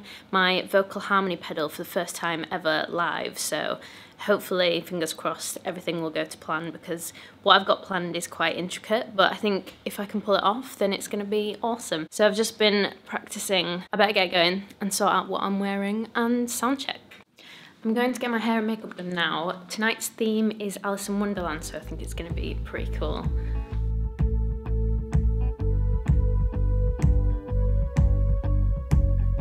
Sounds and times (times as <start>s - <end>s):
Speech: 0.3s - 17.1s, 17.8s - 23.4s
Music: 21.4s - 29.4s.